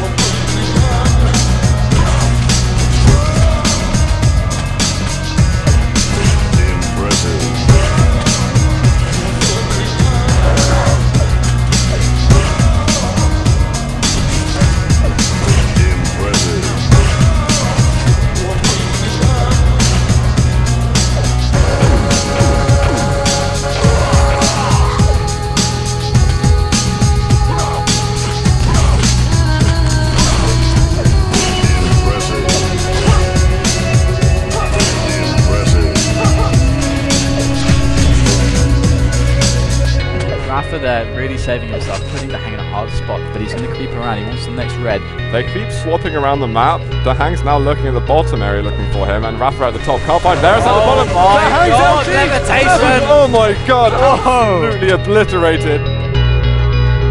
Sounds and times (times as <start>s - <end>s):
Music: 0.0s - 57.1s.